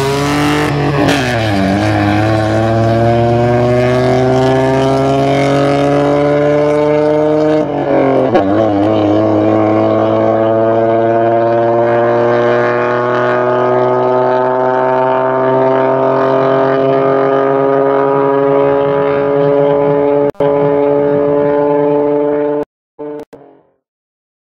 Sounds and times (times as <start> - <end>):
Race car, auto racing: 0.0 - 23.8
Outside, urban or manmade: 0.0 - 23.9.